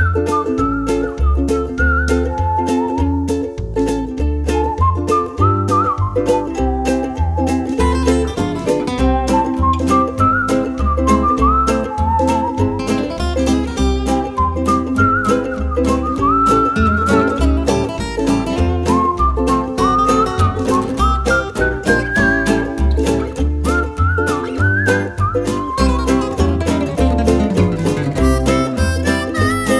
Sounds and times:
Flamenco: 0.0s - 29.7s
Mandolin: 0.0s - 29.7s.

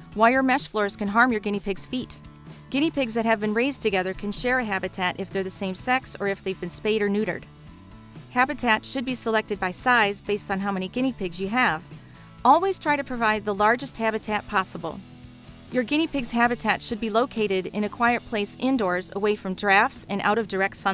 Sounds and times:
Music: 0.0s - 20.9s
Speech: 0.2s - 7.4s, 8.4s - 11.9s, 12.5s - 15.0s, 15.8s - 20.9s.

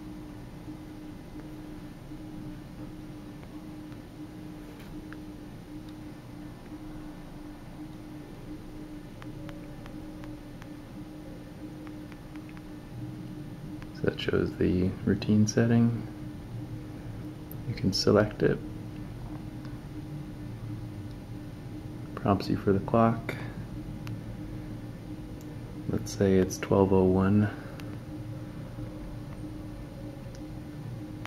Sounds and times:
Speech: 14.0s - 16.1s, 17.7s - 18.6s, 22.2s - 23.6s, 25.9s - 27.6s.

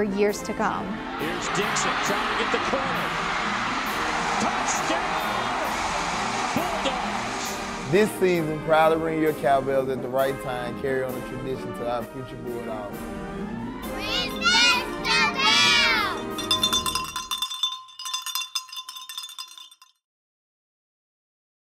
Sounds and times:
Cowbell: 16.0s - 20.0s.

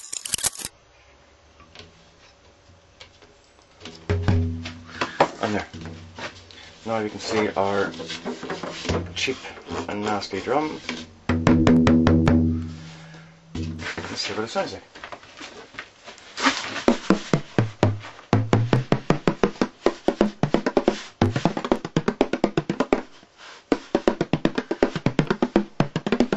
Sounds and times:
Drum: 4.1s - 6.4s, 11.2s - 14.1s, 16.9s - 23.0s, 23.9s - 26.3s
Speech: 5.4s - 5.8s, 6.8s - 8.0s, 9.1s - 10.9s, 14.0s - 14.9s.

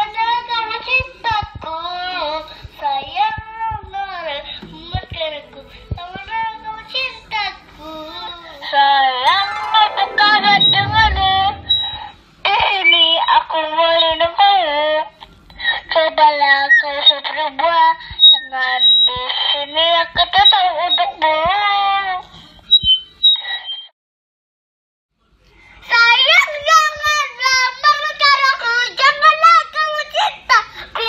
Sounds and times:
Child speech, kid speaking: 25.9s - 31.0s.

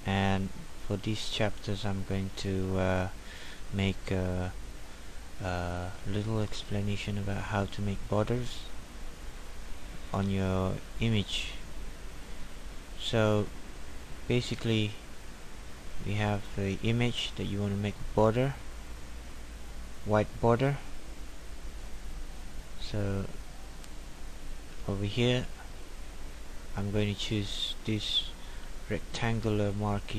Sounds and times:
Speech: 0.0s - 4.6s, 5.4s - 8.7s, 10.1s - 11.6s, 13.0s - 13.5s, 14.3s - 15.0s, 16.0s - 18.6s, 20.1s - 20.9s, 22.8s - 23.4s, 24.8s - 25.6s, 26.8s - 30.1s.

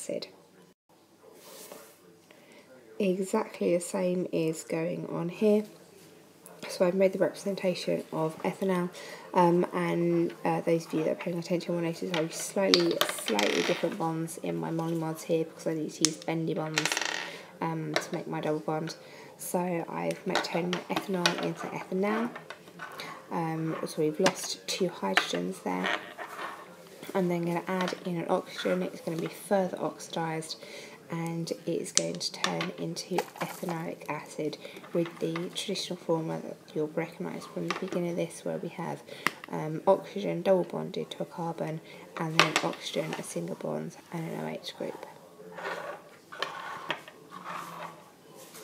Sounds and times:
Speech: 0.0s - 46.1s.

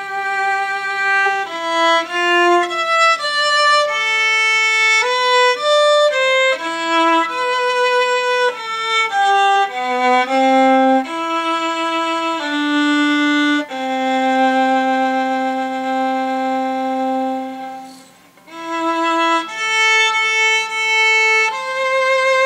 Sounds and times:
Violin, fiddle: 0.0s - 22.4s.

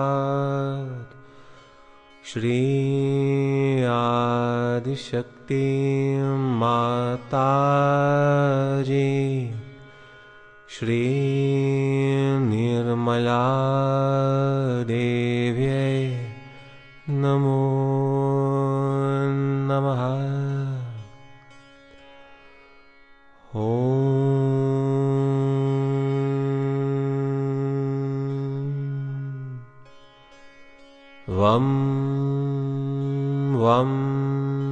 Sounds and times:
Mantra: 2.3s - 9.7s, 10.7s - 16.4s, 23.6s - 29.6s, 31.3s - 34.7s.

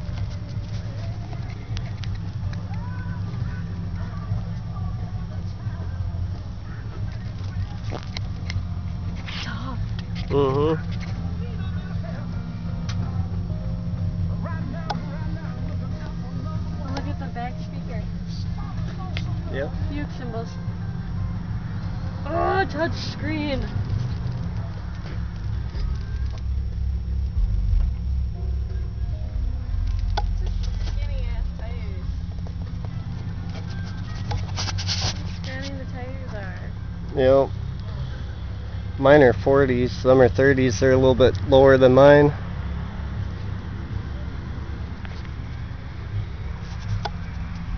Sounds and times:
Music: 0.0s - 39.0s
Outside, urban or manmade: 0.0s - 47.7s
Vehicle: 0.0s - 47.7s.

